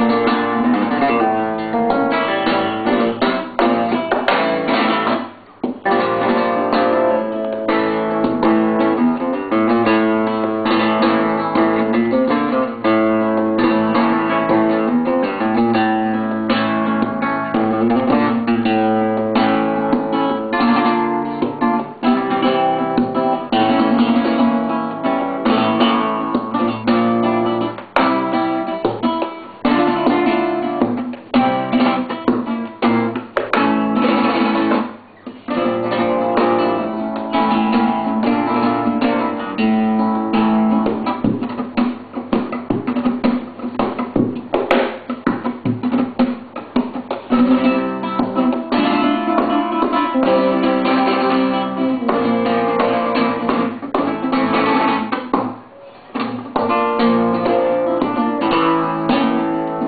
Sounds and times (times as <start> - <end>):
Flamenco: 0.0 - 59.8
Guitar: 0.0 - 59.8.